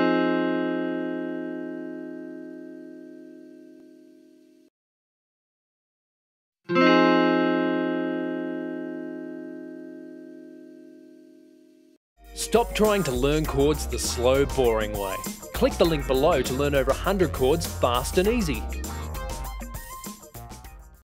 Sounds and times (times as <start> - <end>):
Music: 0.0 - 4.7, 6.7 - 21.0
Speech: 12.4 - 18.7.